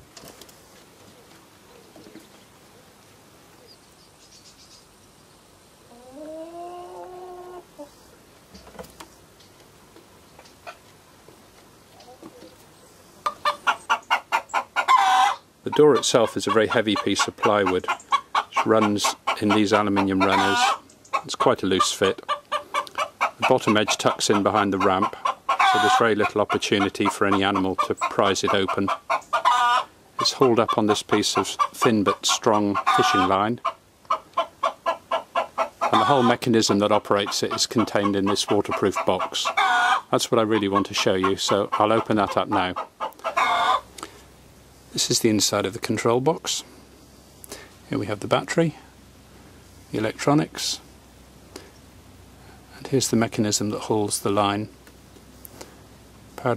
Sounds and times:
Outside, rural or natural: 0.0 - 56.5
Chicken, rooster: 5.9 - 8.1, 12.0 - 12.6, 13.2 - 43.9
Speech: 15.6 - 17.9, 18.6 - 20.7, 21.3 - 22.2, 23.4 - 25.2, 25.8 - 29.0, 30.2 - 33.6, 35.9 - 42.8, 45.0 - 46.7, 47.9 - 48.9, 49.9 - 50.8, 52.7 - 54.8, 56.4 - 56.5.

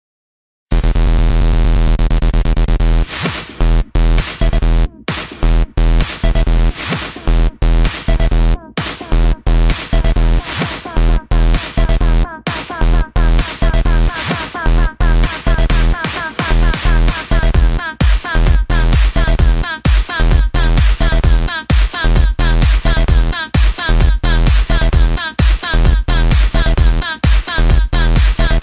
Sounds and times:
Techno: 0.7 - 28.6.

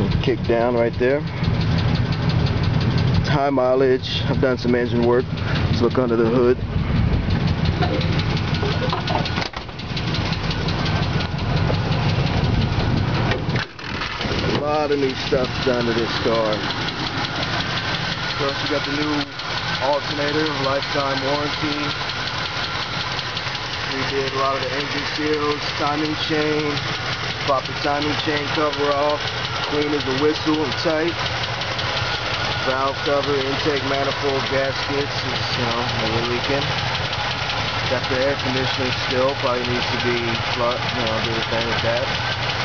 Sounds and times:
Speech: 0.0 - 1.3, 3.3 - 6.6, 14.5 - 16.6, 18.4 - 22.0, 23.9 - 26.8, 27.4 - 31.2, 32.6 - 36.7, 37.9 - 42.1
Car: 0.0 - 42.6
Engine: 0.0 - 42.6.

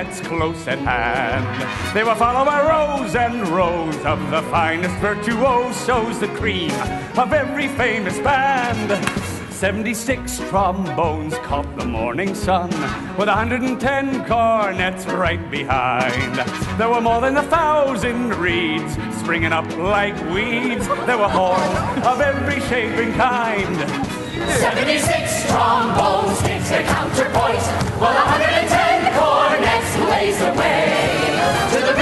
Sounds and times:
Music: 0.0 - 32.0.

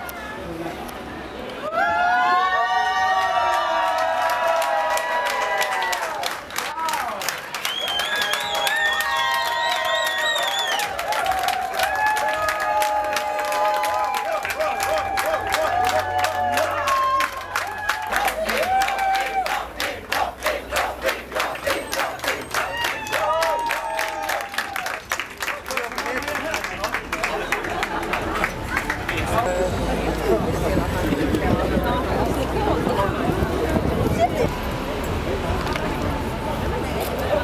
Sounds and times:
Speech: 25.4 - 27.6.

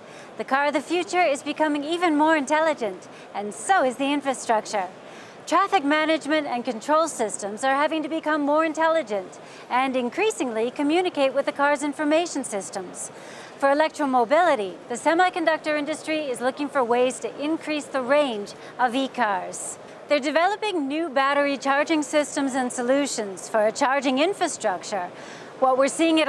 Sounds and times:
Speech: 0.4 - 4.9, 5.5 - 26.2.

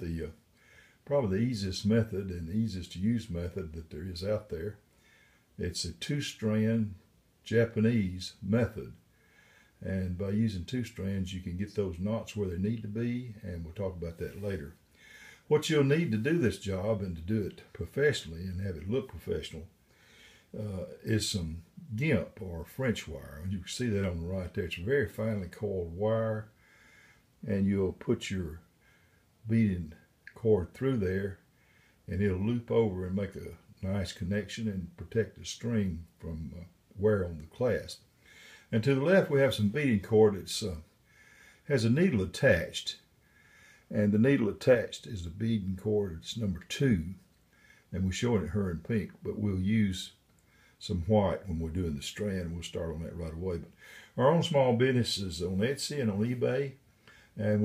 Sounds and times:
Speech: 0.0 - 0.4, 1.0 - 4.8, 5.6 - 9.0, 9.8 - 14.8, 15.5 - 19.7, 20.5 - 26.6, 27.4 - 28.7, 29.4 - 31.4, 32.1 - 38.1, 38.7 - 40.9, 41.6 - 43.1, 43.9 - 47.3, 47.9 - 50.2, 50.8 - 56.8, 57.4 - 57.6.

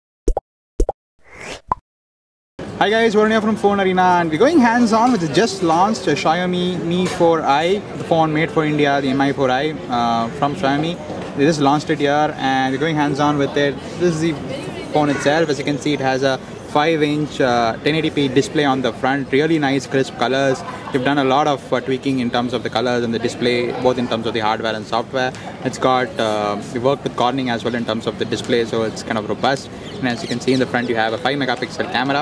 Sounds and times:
Speech: 2.8 - 32.2.

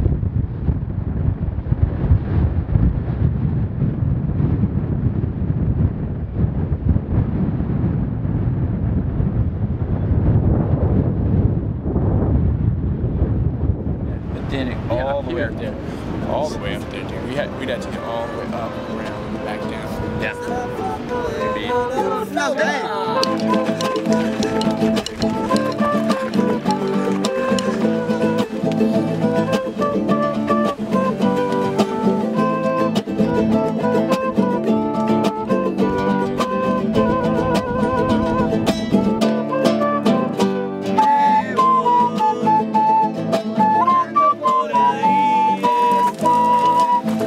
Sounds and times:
Outside, rural or natural: 0.0 - 47.2
Music: 16.4 - 47.2.

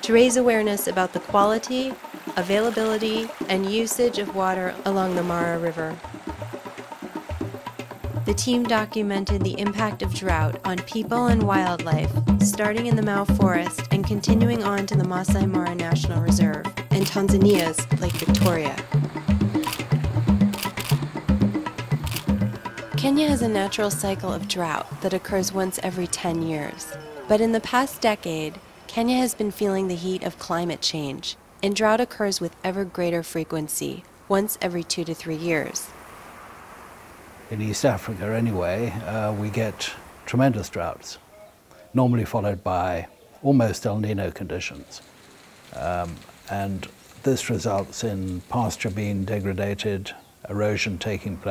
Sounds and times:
Speech: 0.0 - 6.0, 8.3 - 18.8, 23.0 - 35.9, 37.5 - 41.2, 42.0 - 45.0, 45.8 - 51.5
Music: 0.0 - 30.2.

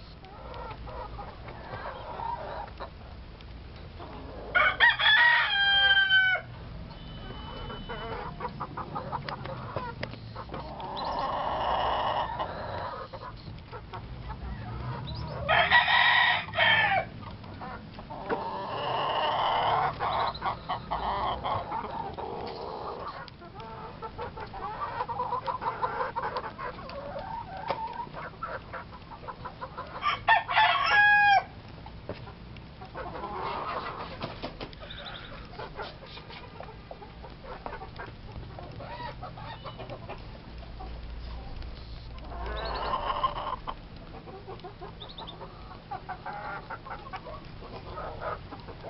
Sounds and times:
Cluck: 0.3 - 3.0, 7.3 - 15.5, 17.2 - 30.0, 32.1 - 48.8.

